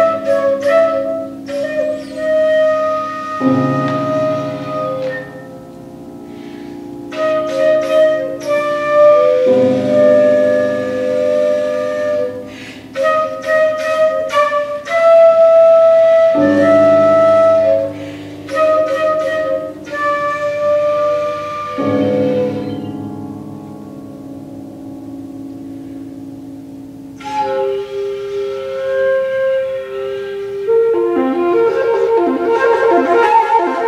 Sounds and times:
Classical music: 0.0 - 33.8
Piano: 0.0 - 33.8.

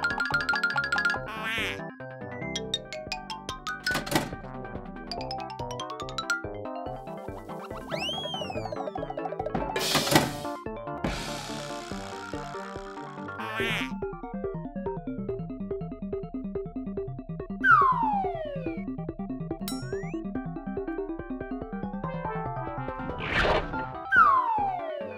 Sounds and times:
Music for children: 0.0 - 23.1, 23.8 - 25.1.

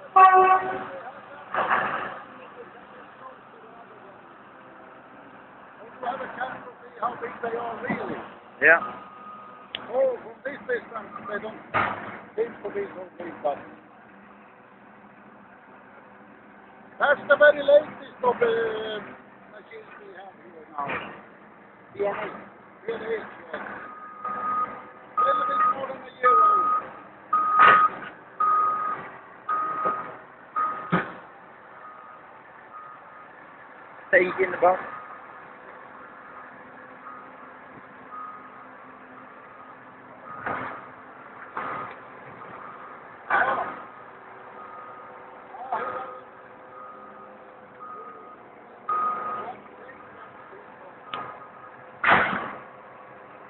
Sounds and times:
Speech: 5.8 - 8.8, 12.4 - 13.7, 17.0 - 21.0, 22.0 - 23.7, 25.2 - 26.8, 34.1 - 34.9, 45.5 - 46.3.

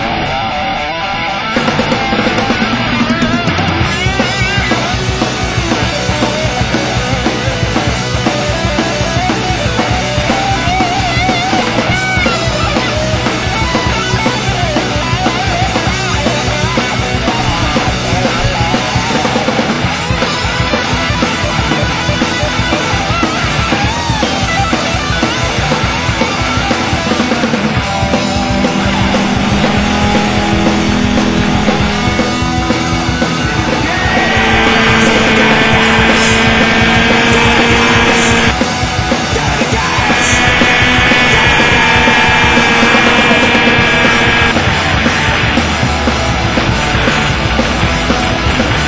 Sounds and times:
Music: 0.0 - 48.8.

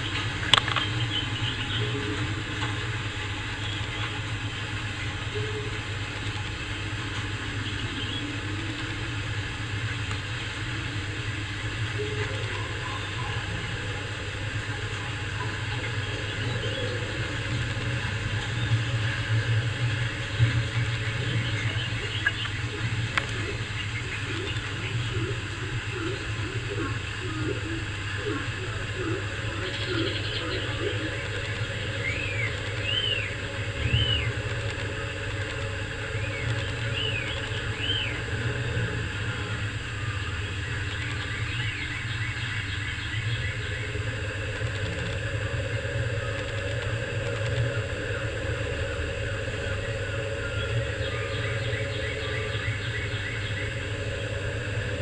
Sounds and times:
Outside, rural or natural: 0.0 - 55.0.

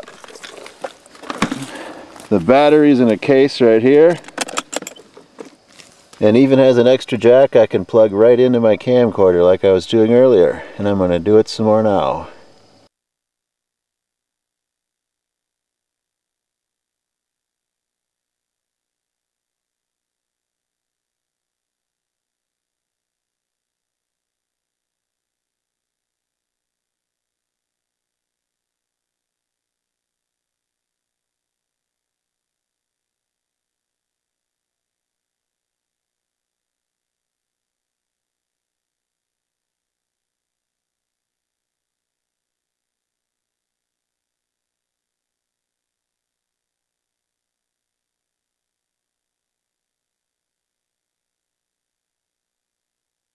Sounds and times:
Speech: 2.3 - 4.2, 6.2 - 12.4.

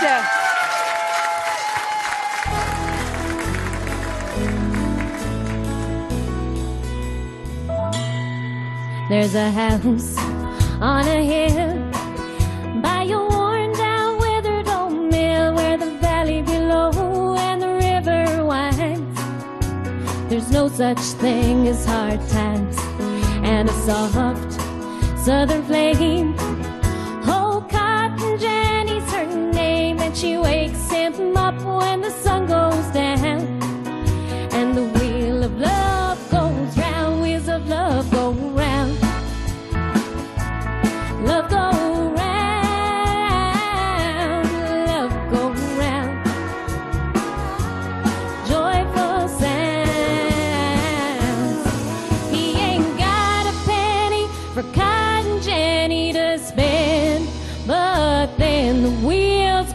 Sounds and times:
Pop music: 2.4 - 7.1, 8.9 - 59.7.

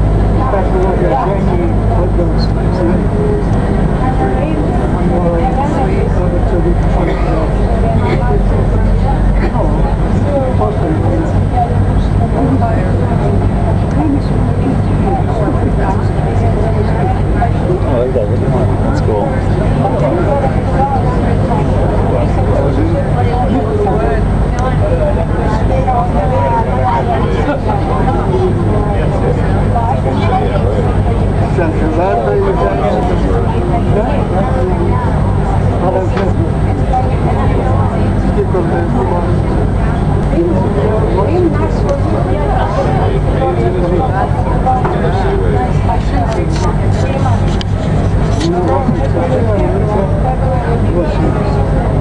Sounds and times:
Speech: 0.0 - 52.0.

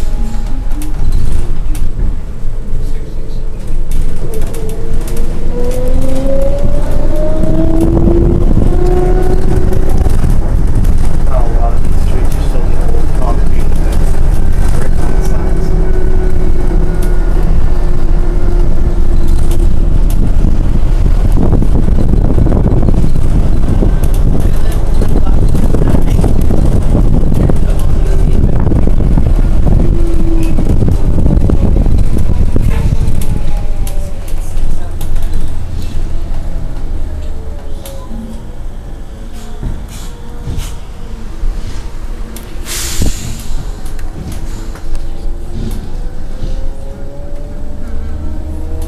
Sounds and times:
Bus: 0.0 - 48.8
Speech: 11.3 - 15.7.

